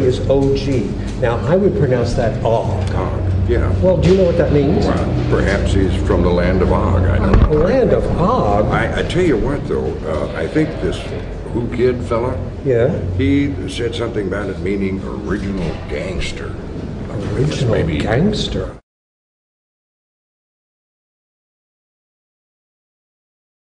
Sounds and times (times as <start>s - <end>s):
Speech: 0.0s - 18.8s.